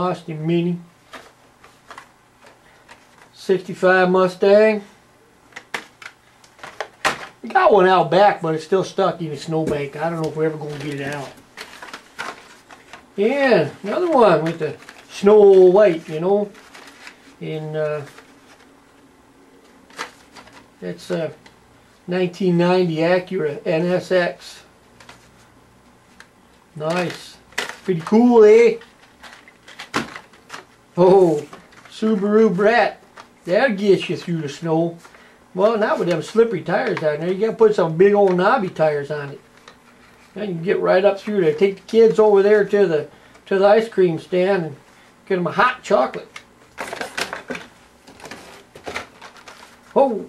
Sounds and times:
Speech: 0.0 - 0.9, 3.4 - 4.9, 7.4 - 11.4, 13.2 - 16.6, 17.4 - 18.1, 20.8 - 21.4, 22.1 - 24.7, 26.8 - 28.9, 31.0 - 35.0, 35.6 - 39.4, 40.4 - 46.4, 50.0 - 50.2
Inside, small room: 0.0 - 50.2.

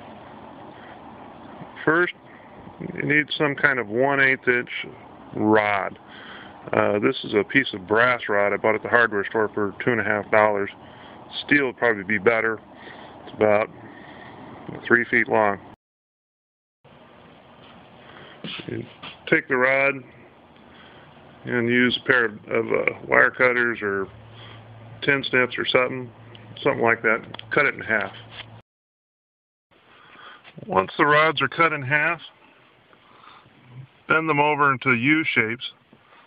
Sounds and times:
Speech: 1.8 - 2.2, 2.8 - 6.0, 6.7 - 12.6, 13.3 - 13.7, 14.7 - 15.8, 18.6 - 20.2, 21.4 - 24.1, 25.0 - 28.2, 30.6 - 32.4, 33.7 - 35.8.

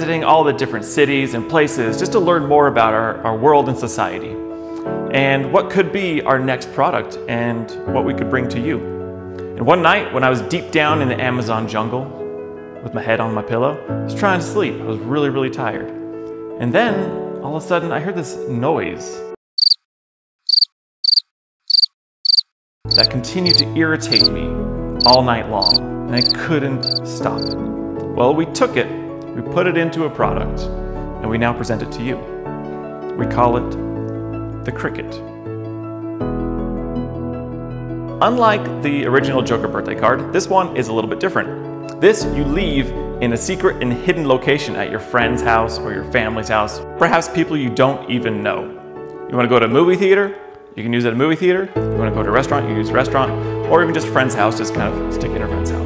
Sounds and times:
Cricket: 19.6 - 19.8, 20.5 - 24.3, 25.0 - 27.6.

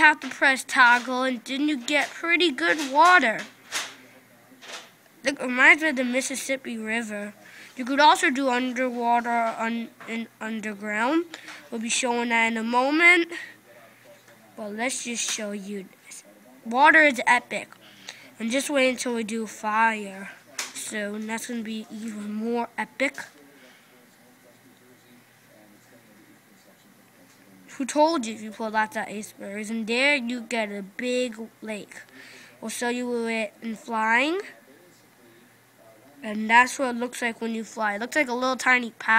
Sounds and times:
Speech: 0.0 - 39.1.

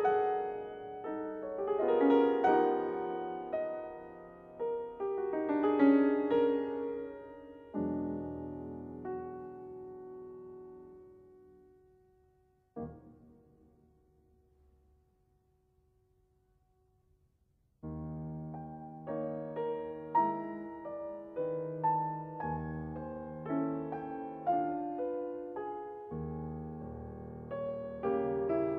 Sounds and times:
Electric piano: 0.0 - 12.1, 12.7 - 13.9, 17.8 - 28.7.

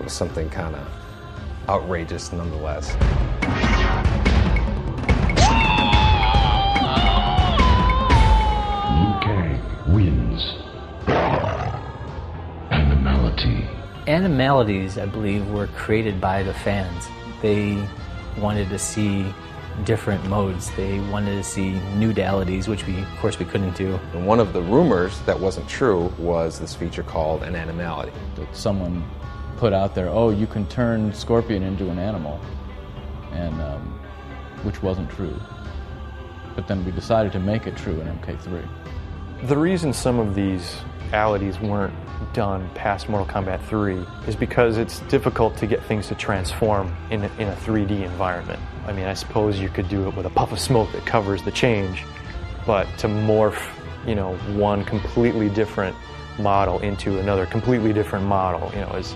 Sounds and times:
Music: 0.0 - 59.1
Speech: 1.7 - 3.0, 8.9 - 10.7, 12.7 - 32.4, 33.3 - 34.0, 39.4 - 52.0, 52.7 - 59.1.

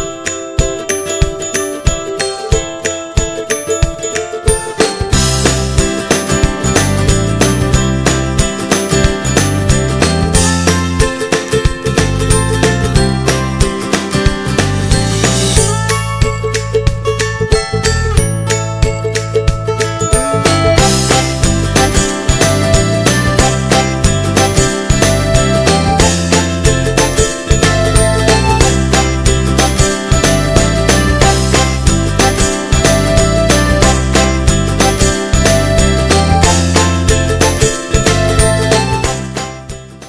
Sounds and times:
Music: 0.0 - 40.0.

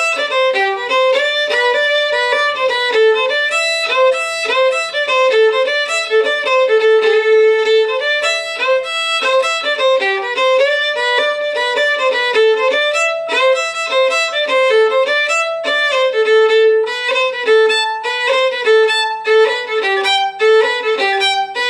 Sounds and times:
Violin, fiddle: 0.0 - 21.7.

